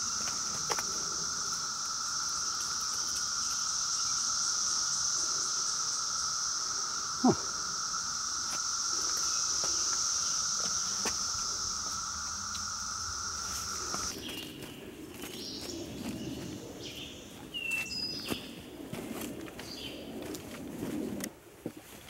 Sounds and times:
Outside, rural or natural: 0:00.0 - 0:22.0.

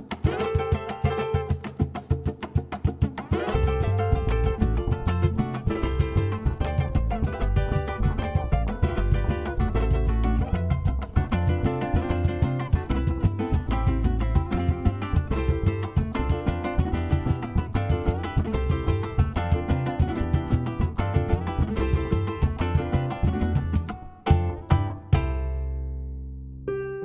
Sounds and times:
Music: 0:00.0 - 0:27.0.

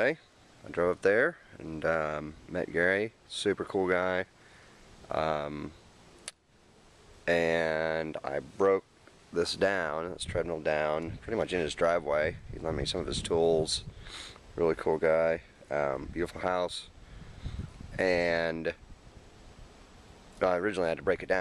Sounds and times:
Speech: 0:00.0 - 0:04.3, 0:05.1 - 0:05.8, 0:07.3 - 0:08.8, 0:09.4 - 0:13.9, 0:14.6 - 0:16.9, 0:18.0 - 0:18.8, 0:20.4 - 0:21.4.

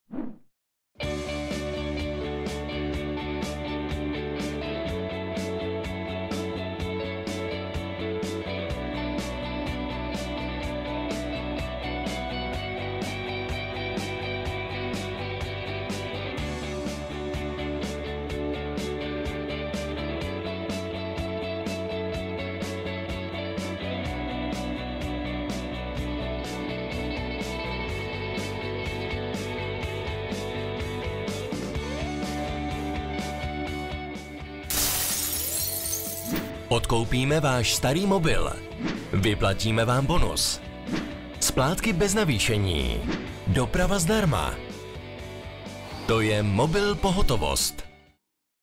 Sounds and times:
Music: 0:01.0 - 0:48.2
Speech: 0:36.7 - 0:38.6, 0:39.2 - 0:40.6, 0:41.4 - 0:44.6, 0:46.1 - 0:47.9.

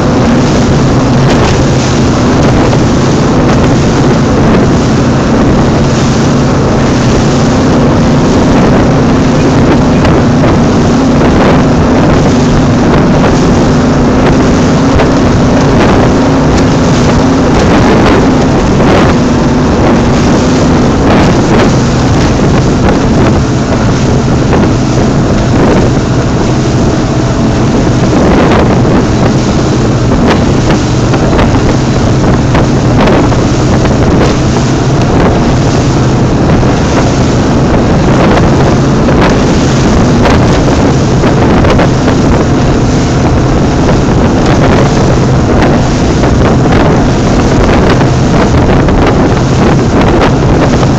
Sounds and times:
Motorboat, speedboat: 0:00.0 - 0:50.9.

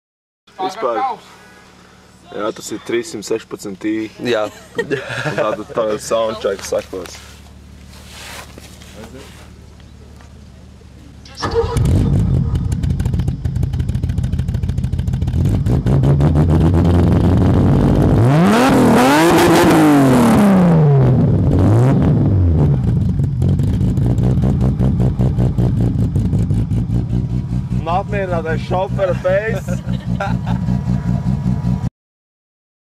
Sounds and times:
Speech: 0:05.4 - 0:07.3, 0:08.9 - 0:09.4, 0:27.8 - 0:29.8.

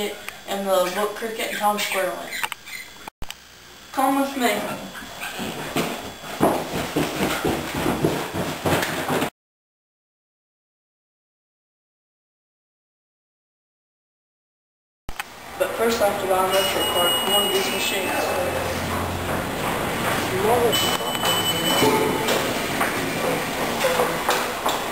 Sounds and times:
Speech: 0:00.0 - 0:02.4, 0:03.9 - 0:05.0, 0:15.6 - 0:18.8, 0:20.3 - 0:22.1.

